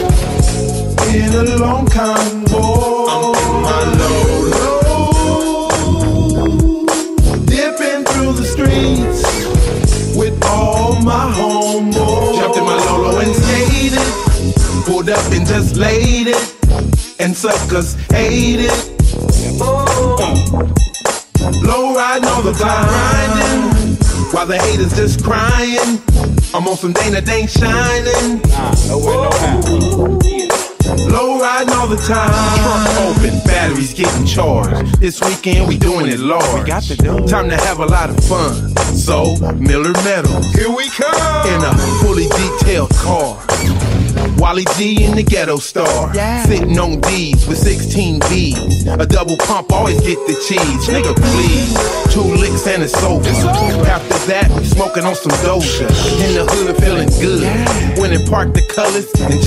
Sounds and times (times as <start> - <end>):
Music: 0.0 - 59.4.